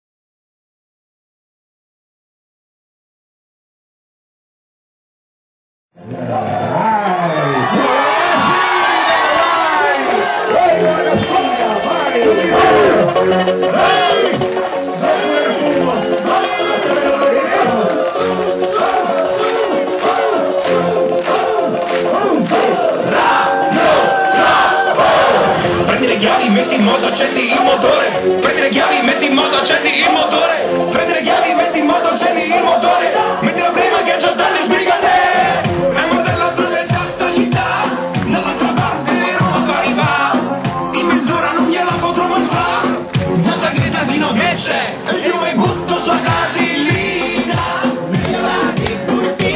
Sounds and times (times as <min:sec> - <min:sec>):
Music: 0:06.0 - 0:49.5.